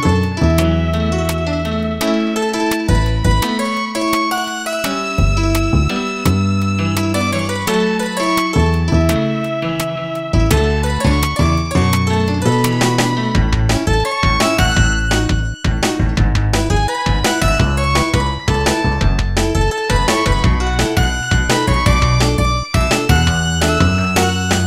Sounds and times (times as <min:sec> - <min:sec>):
Music: 0:00.0 - 0:24.6.